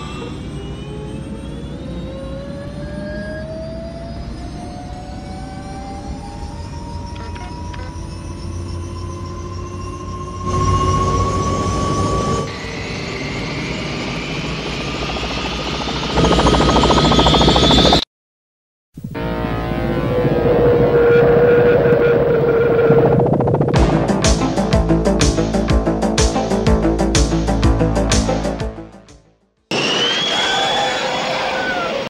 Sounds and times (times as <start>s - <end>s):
Vehicle: 0.0s - 14.4s, 19.1s - 23.8s
Music: 23.8s - 29.6s.